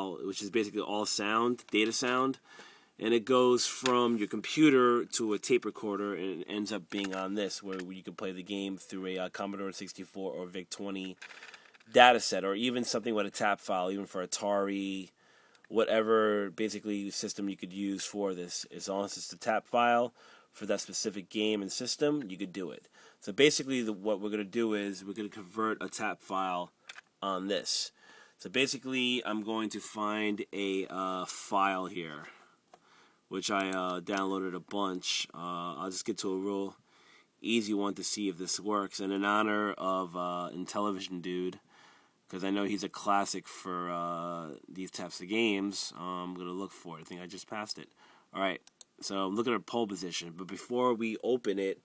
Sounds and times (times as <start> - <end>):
Speech: 0.0 - 2.4, 3.0 - 11.2, 11.9 - 15.1, 15.7 - 32.3, 33.3 - 36.8, 37.4 - 41.6, 42.3 - 51.8.